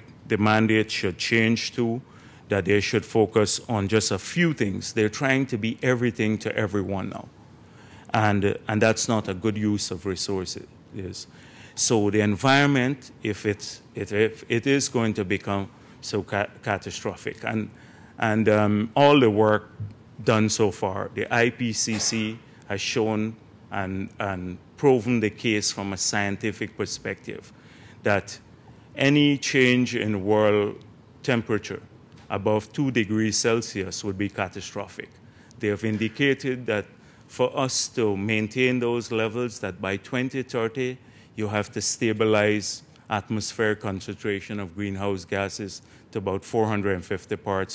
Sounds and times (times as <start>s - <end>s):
Male speech, man speaking: 0.0s - 7.3s, 8.1s - 47.7s.